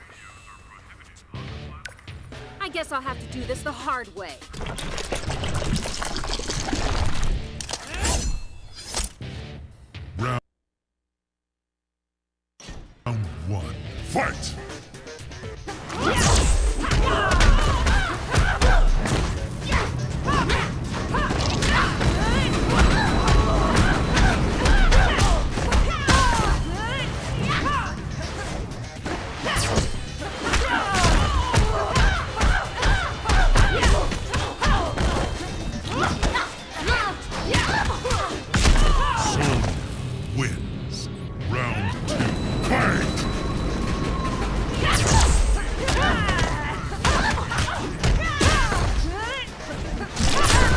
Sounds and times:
Music: 0.0 - 10.4, 12.6 - 50.7.

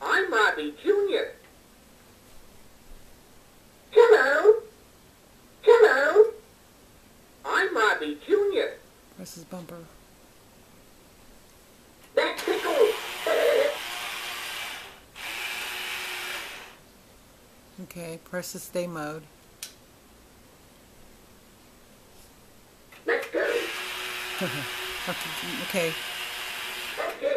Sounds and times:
Speech: 0.0 - 1.4, 7.5 - 10.0, 17.8 - 19.3, 24.4 - 26.0.

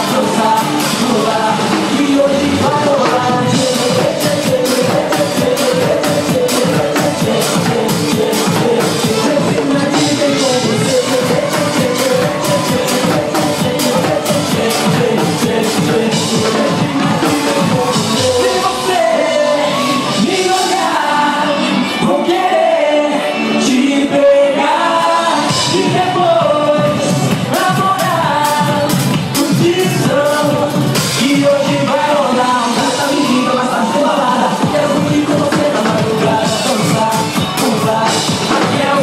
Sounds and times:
Inside, large room or hall: 0.0 - 39.0
Music: 0.0 - 39.0
Singing: 0.0 - 39.0.

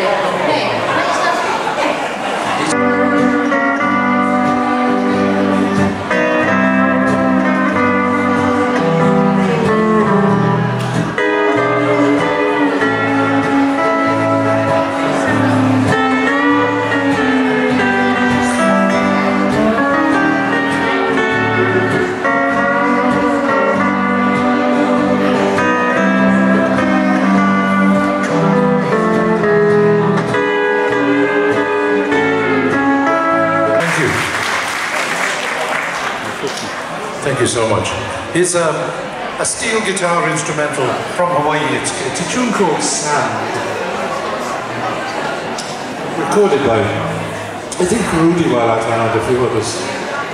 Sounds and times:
Wedding music: 2.5 - 35.8
Song: 2.6 - 34.7
Steel guitar, slide guitar: 2.7 - 33.9.

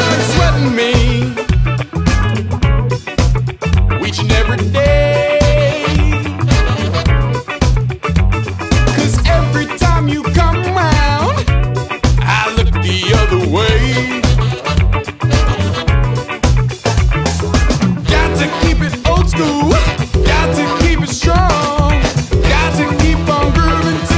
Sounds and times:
Music: 0.0 - 24.1.

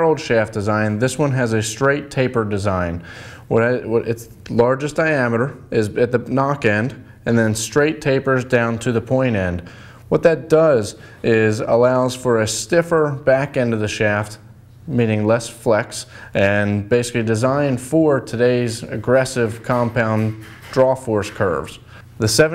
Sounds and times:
Speech: 0.0 - 22.5.

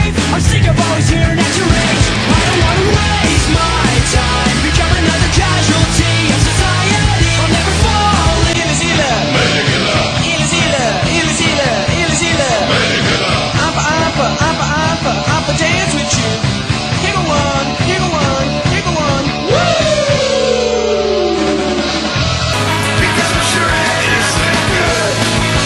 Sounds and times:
Music: 0.0 - 25.6.

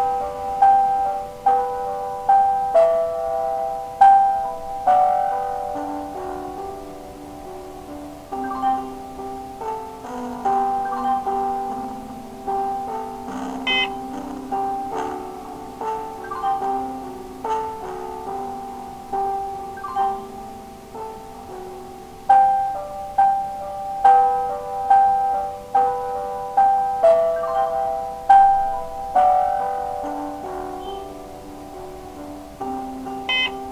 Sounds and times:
Inside, small room: 0.0 - 33.7
Music: 0.0 - 33.7.

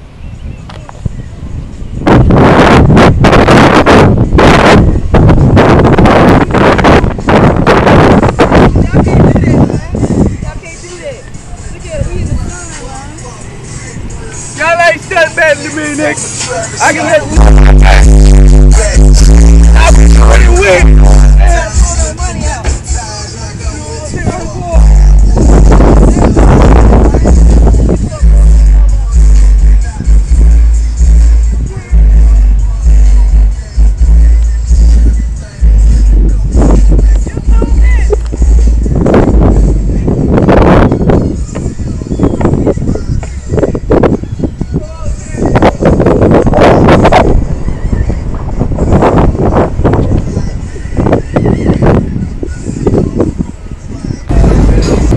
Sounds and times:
Music: 0.1 - 55.1.

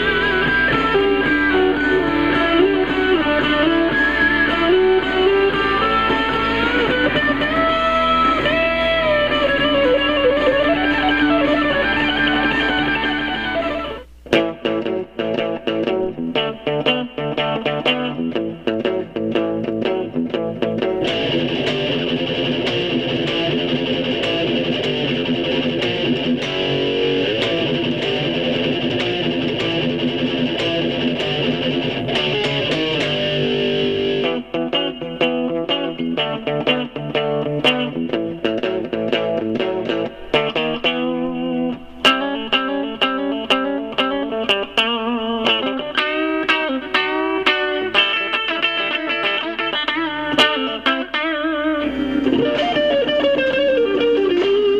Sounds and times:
Electric guitar: 0.0 - 54.7.

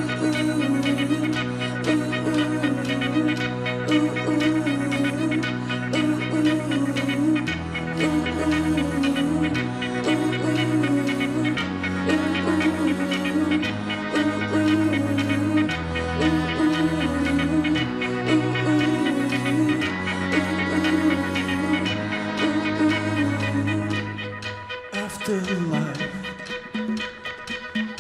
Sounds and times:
Exciting music: 0.0 - 28.0.

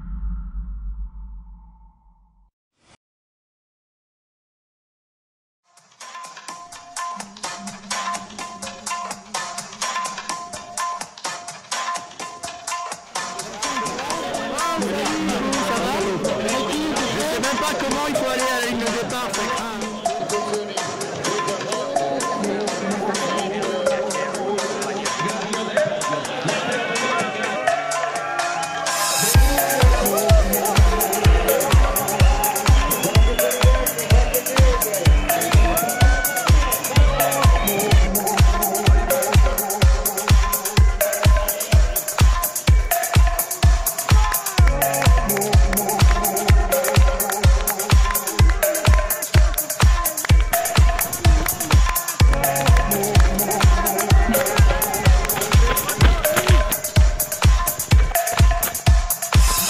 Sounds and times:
Music: 5.6 - 59.6
Speech: 13.4 - 27.5.

